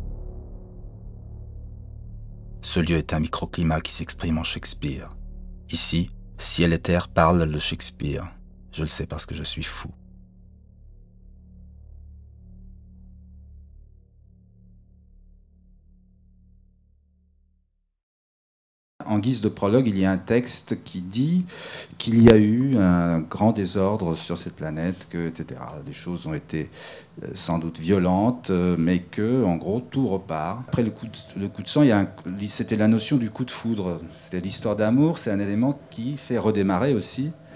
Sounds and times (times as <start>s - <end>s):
Speech: 2.6s - 10.0s, 19.0s - 37.4s.